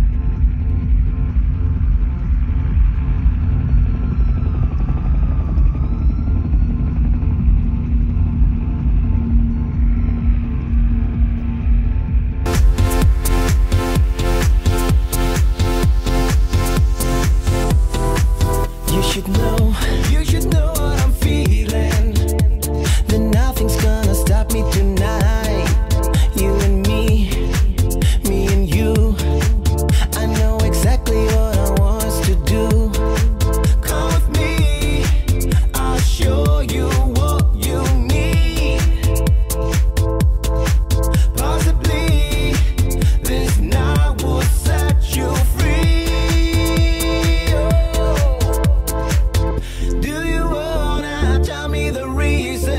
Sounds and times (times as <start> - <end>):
Exciting music: 0.0 - 52.7.